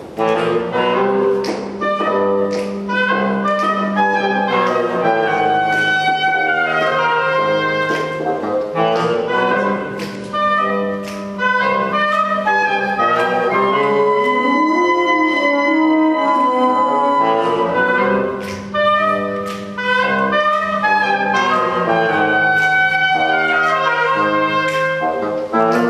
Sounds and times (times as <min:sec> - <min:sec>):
Music: 0:00.0 - 0:25.9.